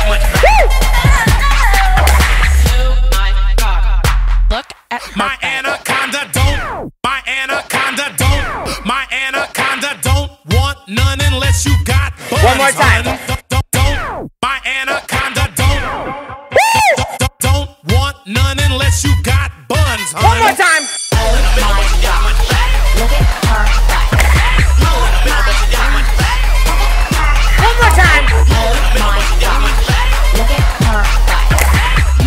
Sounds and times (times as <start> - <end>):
Music: 0.0 - 4.6, 5.5 - 32.2.